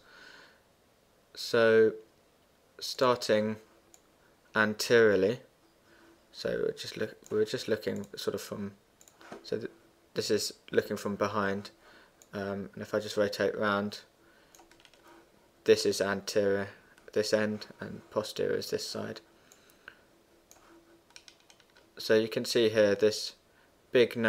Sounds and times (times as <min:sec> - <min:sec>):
Computer keyboard: 0:14.5 - 0:15.1, 0:20.5 - 0:21.9.